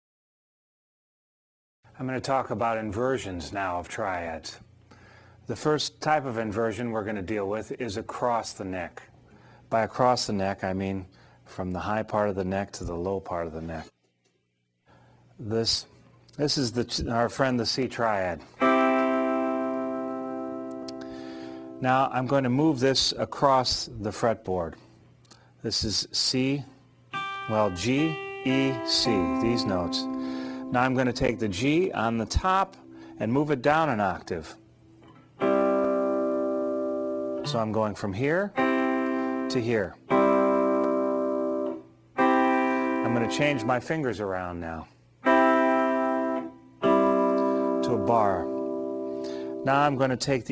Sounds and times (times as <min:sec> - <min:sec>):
Speech: 0:02.0 - 0:04.6, 0:05.5 - 0:09.1, 0:09.7 - 0:13.9, 0:15.4 - 0:18.5, 0:21.8 - 0:24.8, 0:25.6 - 0:26.8, 0:27.5 - 0:30.1, 0:30.7 - 0:34.6, 0:37.4 - 0:38.6, 0:39.5 - 0:40.0, 0:43.0 - 0:44.9, 0:47.8 - 0:48.5, 0:49.6 - 0:50.5
Strum: 0:27.2 - 0:34.2.